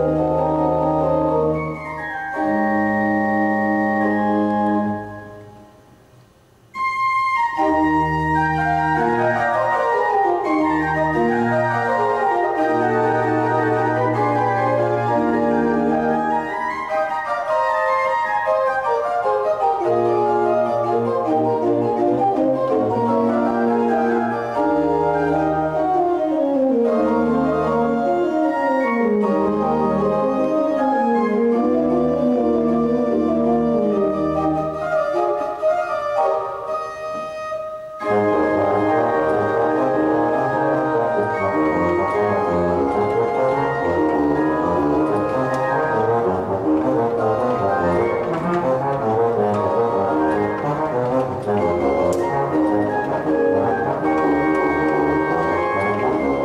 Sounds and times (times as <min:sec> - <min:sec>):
Organ: 0:00.0 - 0:05.8, 0:06.8 - 0:37.1, 0:38.0 - 0:56.4
Classical music: 0:00.0 - 0:56.4
Piano: 0:00.0 - 0:56.4.